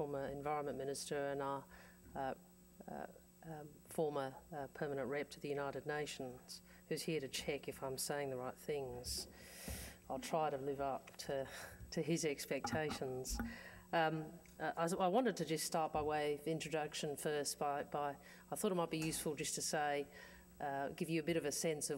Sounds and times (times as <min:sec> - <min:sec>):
Narration, monologue: 0:00.0 - 0:21.9.